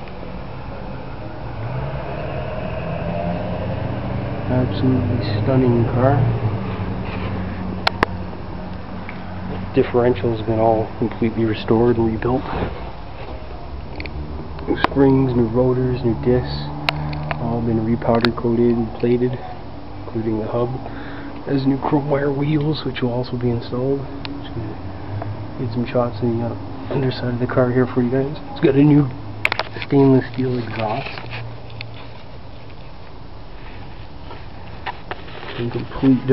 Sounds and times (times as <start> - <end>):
Car: 0.0 - 36.3
Outside, urban or manmade: 0.0 - 36.3
Speech: 4.5 - 6.3, 9.7 - 12.6, 14.7 - 16.8, 17.4 - 20.8, 21.5 - 24.8, 25.6 - 29.2, 29.8 - 31.2, 35.6 - 36.3.